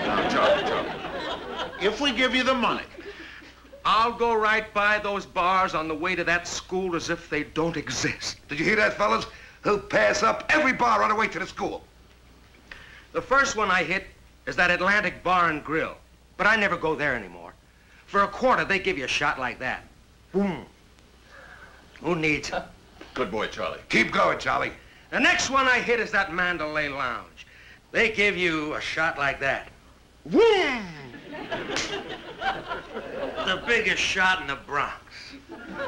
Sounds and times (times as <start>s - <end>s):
Speech: 0.0s - 1.0s, 1.8s - 3.0s, 3.8s - 11.9s, 13.1s - 20.8s, 22.0s - 31.2s, 33.3s - 35.4s.